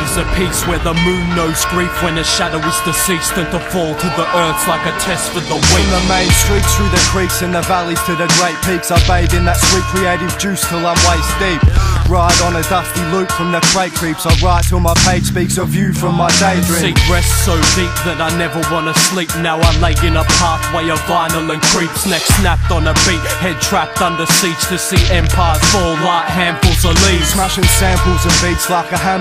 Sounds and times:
Music: 0:00.0 - 0:29.2.

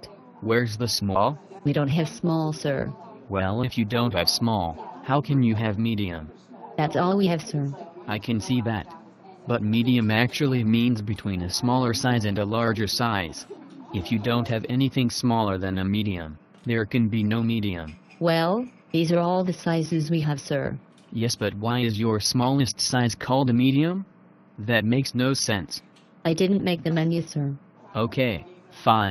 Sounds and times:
Speech: 0:00.0 - 0:24.0, 0:24.6 - 0:29.1.

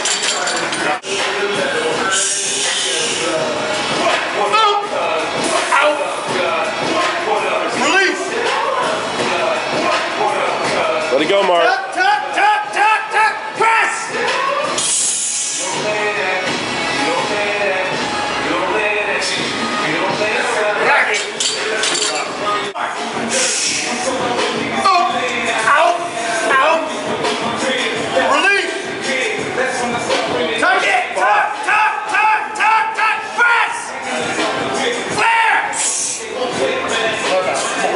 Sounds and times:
Music: 0:00.0 - 0:37.9.

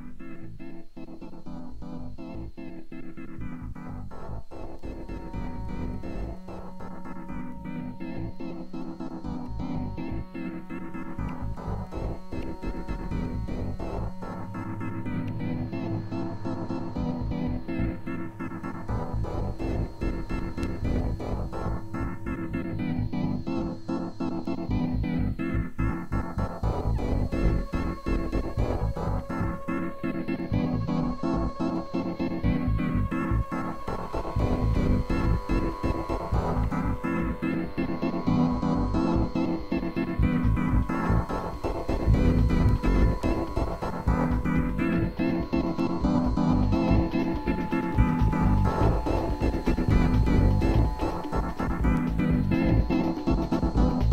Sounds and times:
Music: 0:00.0 - 0:54.1.

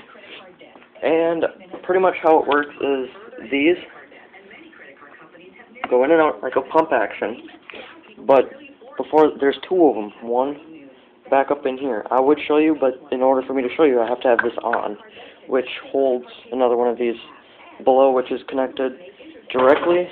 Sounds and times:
Speech: 0:00.0 - 0:20.1.

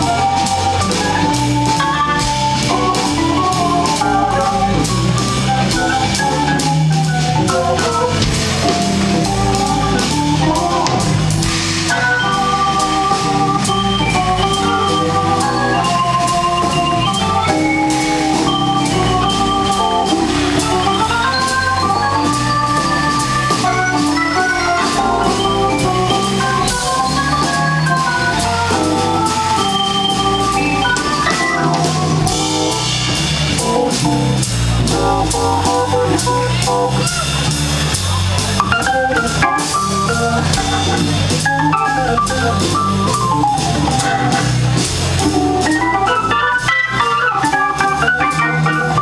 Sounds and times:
Jazz: 0:00.0 - 0:49.0.

